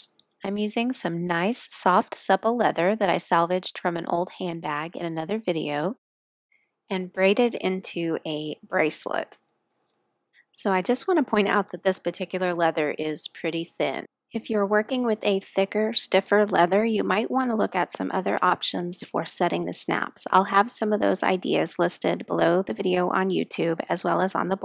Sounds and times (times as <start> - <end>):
Speech: 0.0 - 6.0, 6.9 - 9.4, 10.6 - 24.6.